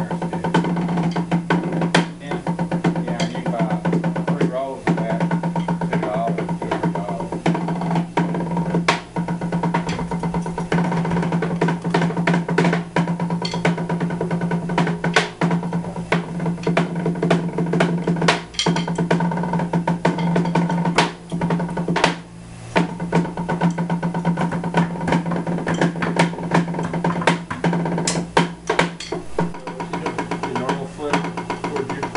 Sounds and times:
Drum roll: 0.0 - 32.1.

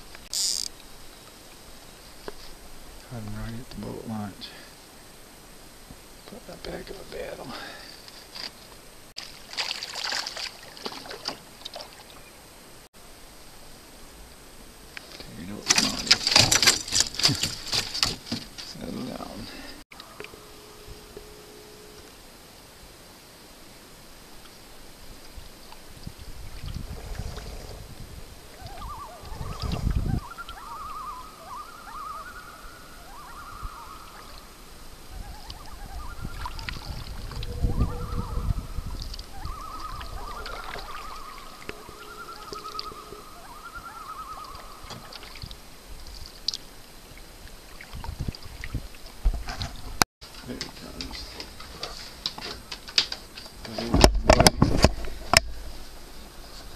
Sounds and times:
Rowboat, canoe, kayak: 0.0 - 56.7
Animal: 28.5 - 45.6.

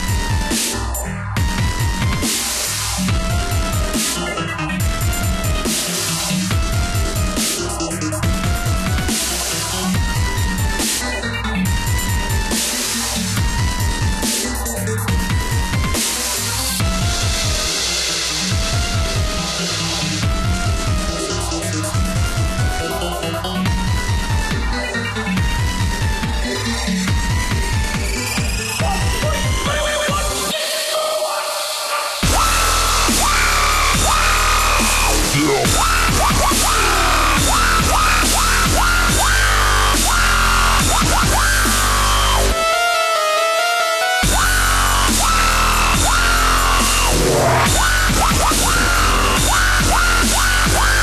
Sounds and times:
Dubstep: 0.0 - 51.0.

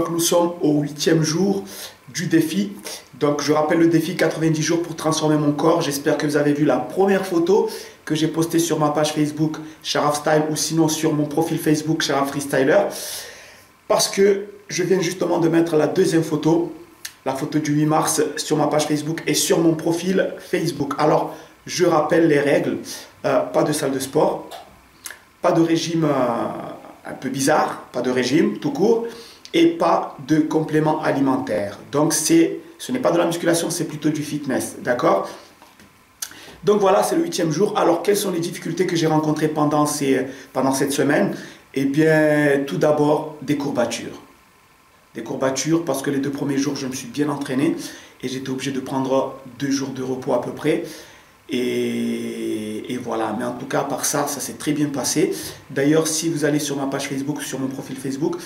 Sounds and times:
Speech: 0.0 - 13.1, 13.9 - 24.7, 25.4 - 35.4, 36.6 - 44.3, 45.1 - 50.9, 51.5 - 58.4.

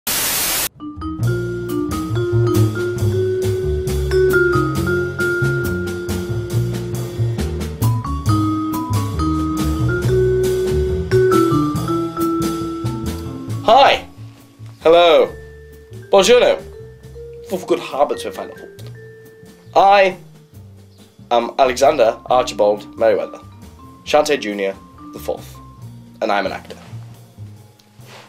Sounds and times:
Vibraphone: 0.8 - 14.4, 15.0 - 26.1.

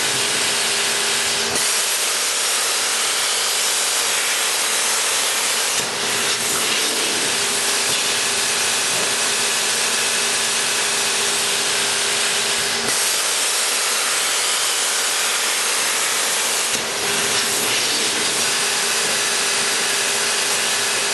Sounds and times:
Power tool: 0.0 - 21.1.

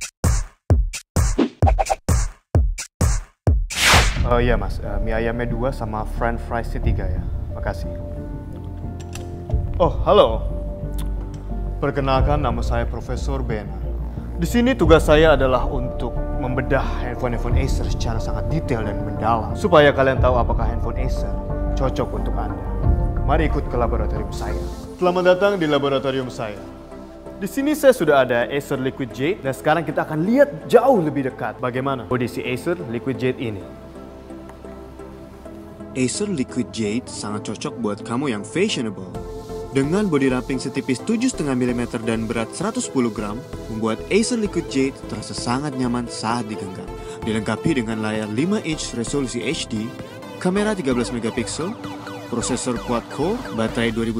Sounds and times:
Music: 0.0 - 54.1
Speech: 4.2 - 7.9, 11.8 - 13.8, 14.4 - 22.6, 23.3 - 26.6, 27.4 - 33.6, 36.0 - 51.8, 52.4 - 54.1.

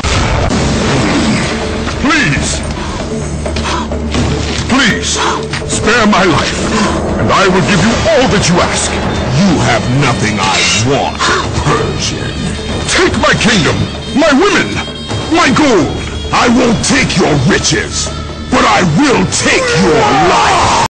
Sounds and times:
Music: 0.0 - 20.9.

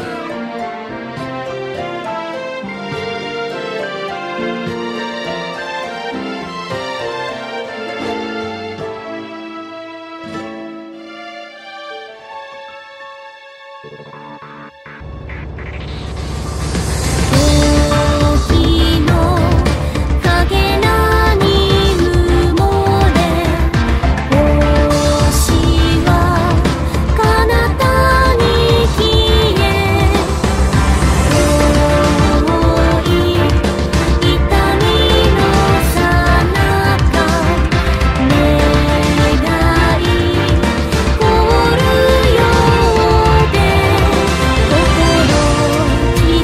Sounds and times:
Music: 0.0 - 46.4.

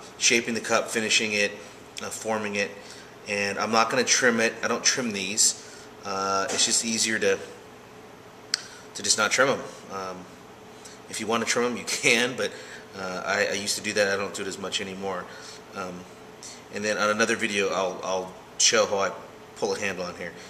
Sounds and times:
Speech: 0.2 - 7.6, 9.0 - 10.3, 11.1 - 16.1, 16.7 - 20.4.

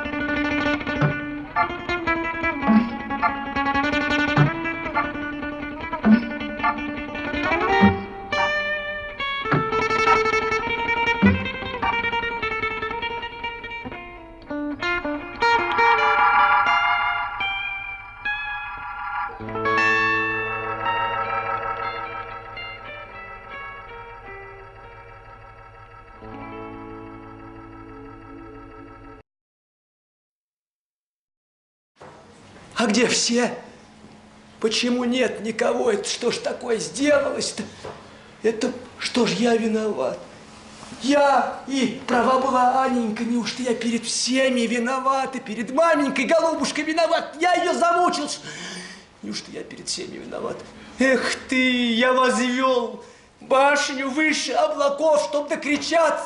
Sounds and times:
Effects unit: 0.0 - 29.2
Music: 0.0 - 29.2.

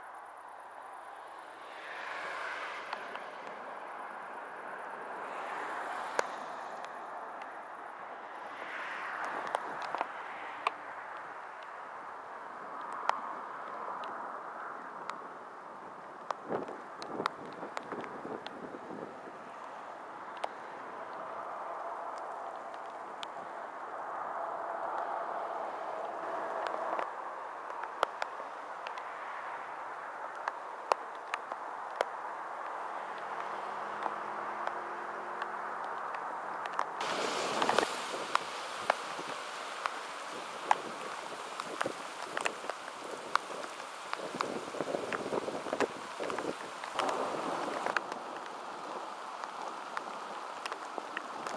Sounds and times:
Rain: 0.0 - 51.5
Rustling leaves: 0.0 - 51.5.

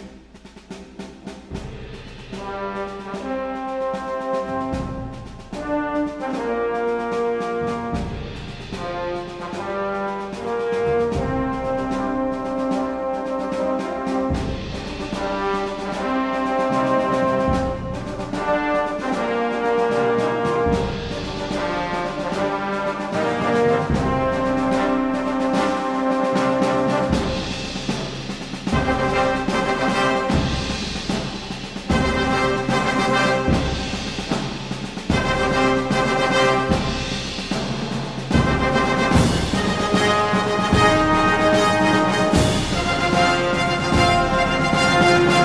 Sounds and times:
Music: 0.0 - 45.4.

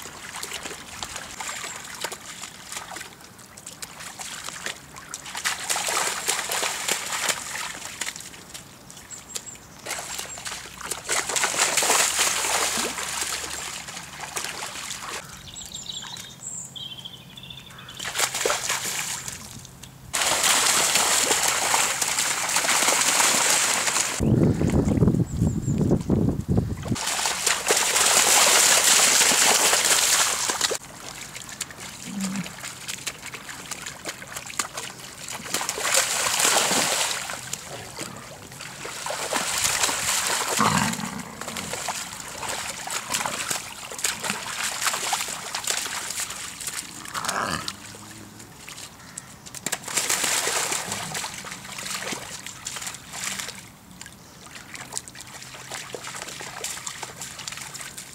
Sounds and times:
Wild animals: 32.0 - 32.6, 40.5 - 41.8, 46.9 - 48.6.

